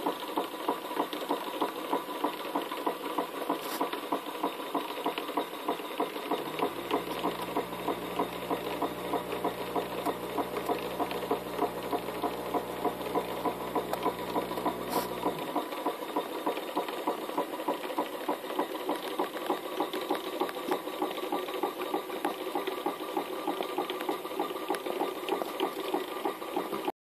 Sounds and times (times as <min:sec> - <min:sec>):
Medium engine (mid frequency): 0:00.0 - 0:26.8
Idling: 0:06.3 - 0:17.8.